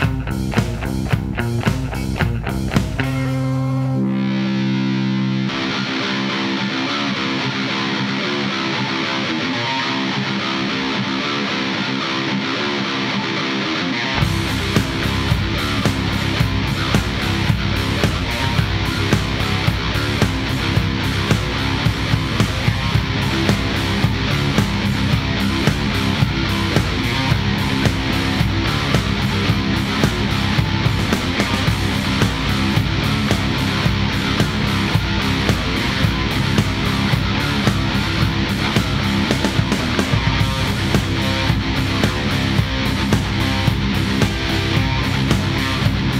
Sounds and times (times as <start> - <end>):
Grunge: 0.0 - 46.1.